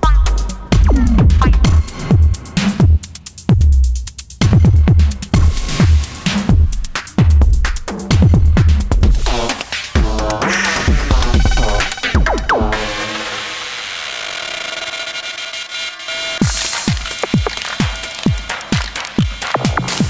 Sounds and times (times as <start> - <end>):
Drum machine: 0.0 - 13.0, 16.4 - 20.1.